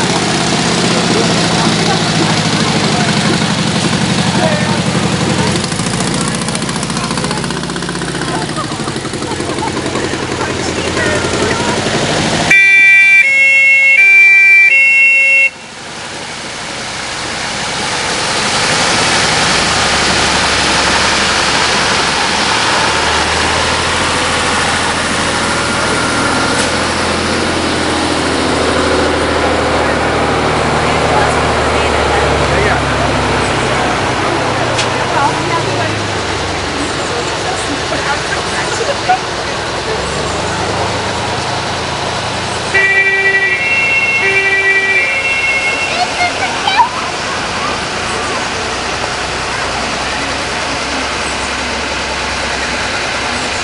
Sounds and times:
Fire engine, fire truck (siren): 0:12.5 - 0:15.7, 0:42.7 - 0:47.6.

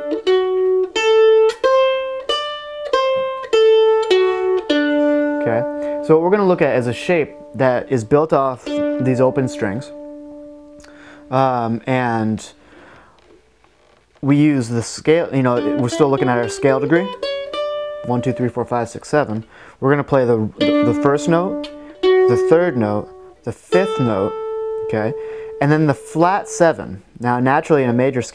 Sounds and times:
Mandolin: 0:00.0 - 0:13.4, 0:14.4 - 0:28.3
Guitar: 0:00.0 - 0:13.6, 0:14.5 - 0:28.3
Speech: 0:05.4 - 0:10.0, 0:11.3 - 0:12.6, 0:14.2 - 0:17.2, 0:18.1 - 0:21.6, 0:22.3 - 0:24.3, 0:24.9 - 0:28.3.

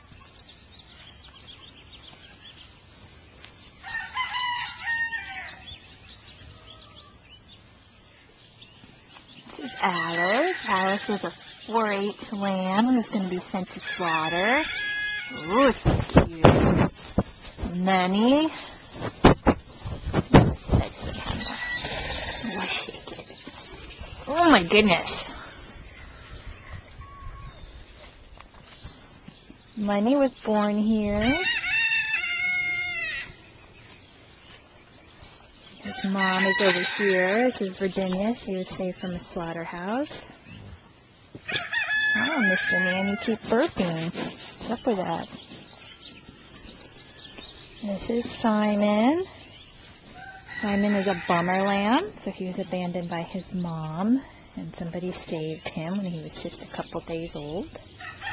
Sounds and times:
Livestock, farm animals, working animals: 0:00.0 - 0:58.3.

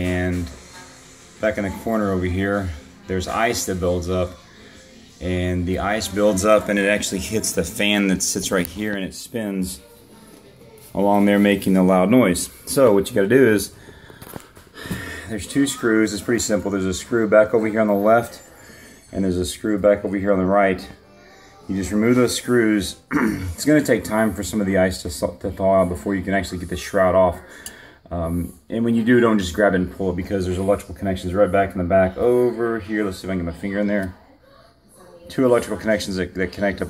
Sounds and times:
Speech: 0:00.0 - 0:13.7, 0:15.3 - 0:18.5, 0:19.1 - 0:21.0, 0:21.6 - 0:27.5, 0:28.1 - 0:36.9.

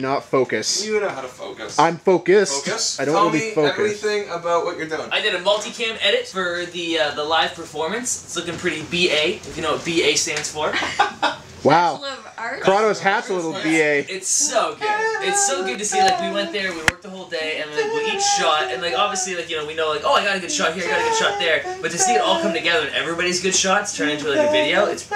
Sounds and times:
Speech: 0:00.0 - 0:10.8, 0:11.6 - 0:25.1.

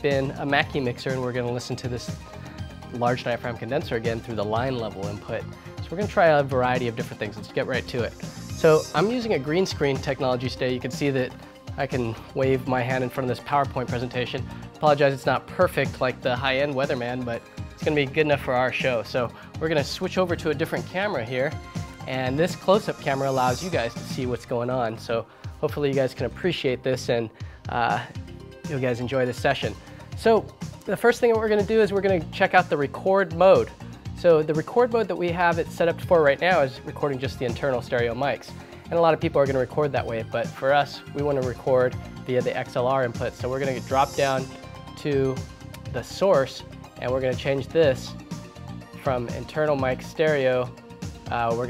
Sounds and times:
Speech: 0:00.0 - 0:02.2, 0:02.9 - 0:48.2, 0:48.9 - 0:50.7, 0:51.3 - 0:51.6
Music: 0:00.0 - 0:51.6.

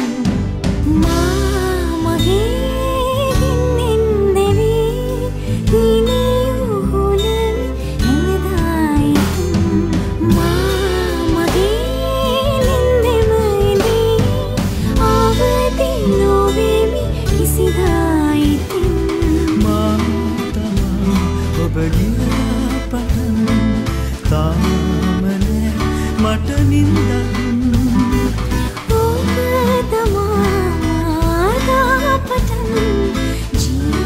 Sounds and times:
Music: 0:00.0 - 0:34.0.

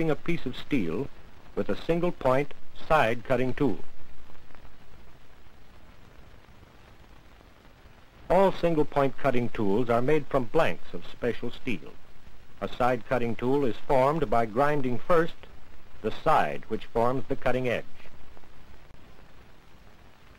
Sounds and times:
Speech: 0:00.0 - 0:03.9, 0:08.3 - 0:12.0, 0:12.6 - 0:18.1.

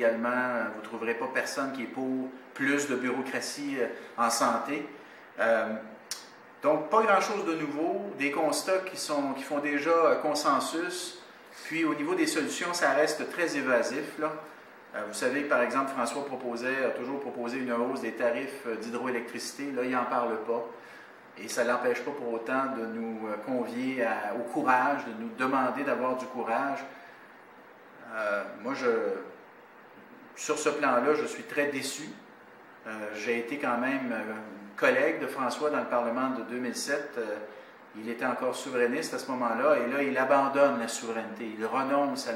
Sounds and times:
Speech: 0:00.0 - 0:20.8, 0:21.4 - 0:27.1, 0:28.0 - 0:29.4, 0:30.3 - 0:42.3.

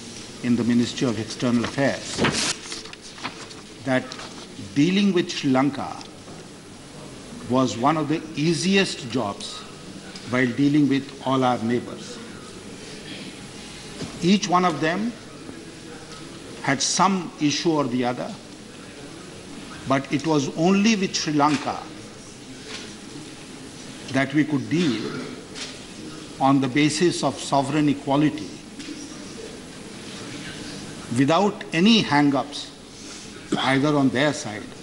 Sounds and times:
Narration, monologue: 0:00.0 - 0:34.8
Male speech, man speaking: 0:00.4 - 0:02.2, 0:03.8 - 0:06.1, 0:07.5 - 0:12.3, 0:14.2 - 0:18.4, 0:19.9 - 0:22.0, 0:24.1 - 0:25.3, 0:26.4 - 0:28.6, 0:31.1 - 0:32.8, 0:33.5 - 0:34.8.

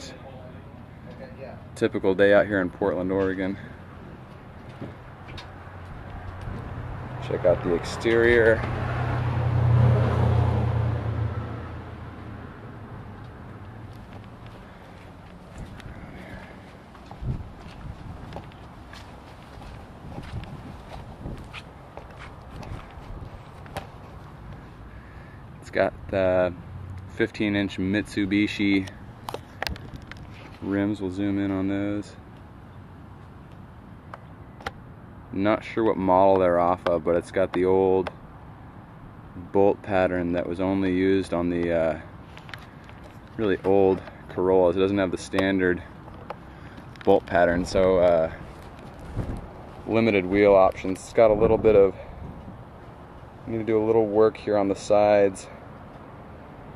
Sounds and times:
Speech: 0:00.0 - 0:03.7, 0:07.2 - 0:08.6, 0:25.6 - 0:28.9, 0:30.6 - 0:32.2, 0:35.3 - 0:38.1, 0:39.4 - 0:42.1, 0:43.4 - 0:45.9, 0:47.0 - 0:48.4, 0:49.9 - 0:52.0, 0:53.5 - 0:55.6
Walk, footsteps: 0:13.9 - 0:24.6.

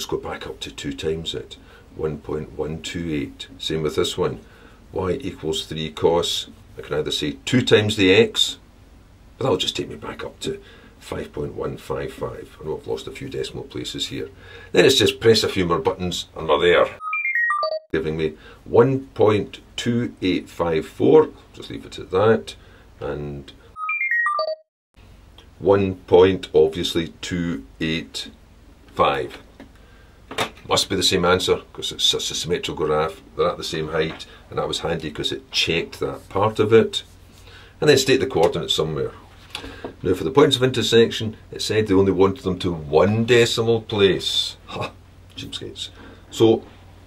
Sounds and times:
Speech: 0:00.0 - 0:08.6, 0:09.4 - 0:17.0, 0:18.0 - 0:23.6, 0:25.6 - 0:29.5, 0:30.6 - 0:37.1, 0:37.8 - 0:39.2, 0:40.0 - 0:46.7
Inside, small room: 0:00.0 - 0:24.4, 0:25.0 - 0:47.0.

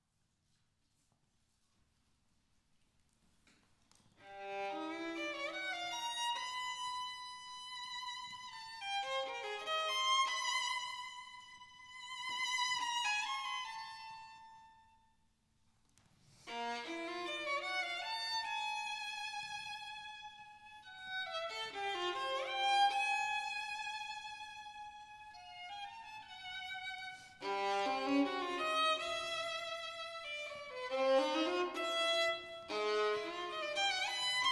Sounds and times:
Violin, fiddle: 0:04.2 - 0:15.0, 0:16.3 - 0:34.5.

